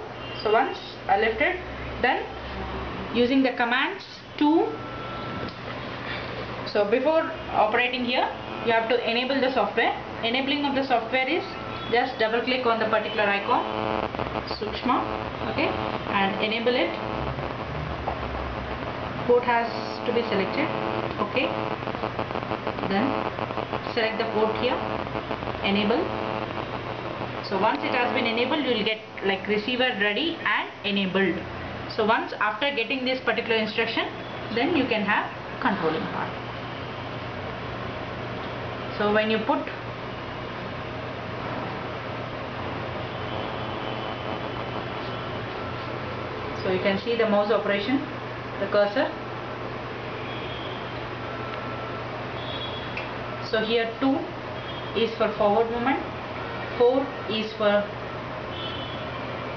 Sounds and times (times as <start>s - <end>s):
Speech: 0.4s - 2.3s, 3.2s - 4.8s, 6.7s - 13.7s, 22.9s - 23.2s, 25.6s - 26.1s, 27.4s - 36.4s, 39.0s - 39.8s, 46.6s - 49.2s, 53.5s - 54.3s, 55.0s - 56.1s, 56.8s - 57.9s.